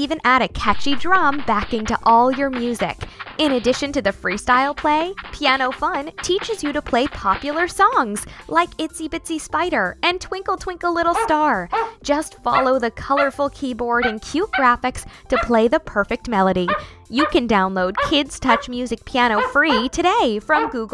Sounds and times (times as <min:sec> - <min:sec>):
Music: 0:00.0 - 0:20.9
Speech: 0:00.0 - 0:20.9.